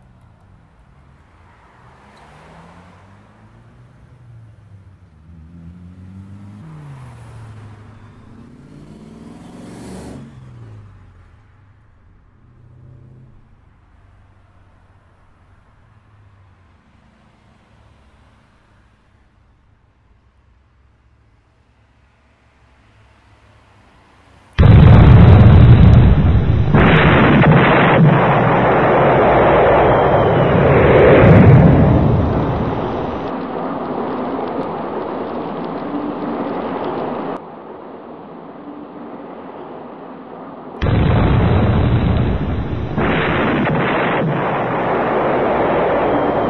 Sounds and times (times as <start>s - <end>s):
Burst, pop: 24.6s - 33.4s, 40.8s - 46.5s.